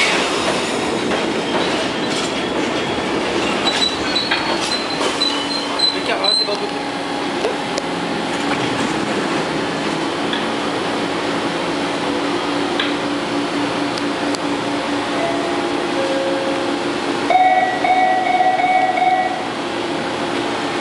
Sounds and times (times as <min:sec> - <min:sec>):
Subway, metro, underground: 0:00.0 - 0:20.8
Train: 0:00.0 - 0:20.8.